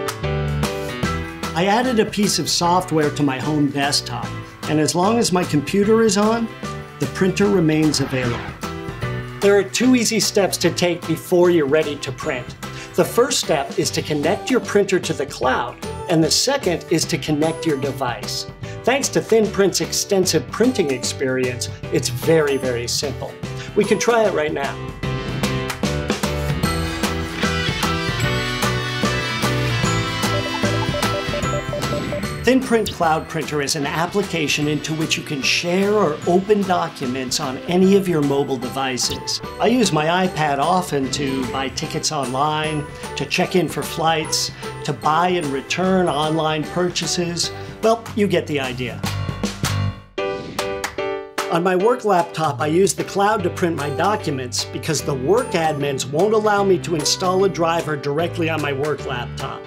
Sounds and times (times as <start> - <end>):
Music: 0.0 - 59.6
Speech: 1.6 - 8.5, 9.4 - 24.8, 32.5 - 49.1, 51.5 - 59.6.